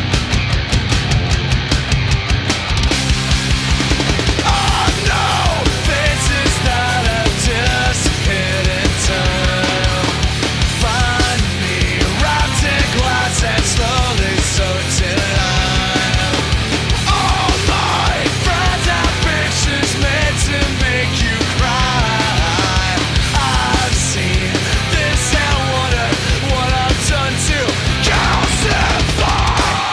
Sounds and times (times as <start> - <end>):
Angry music: 0.0 - 29.9.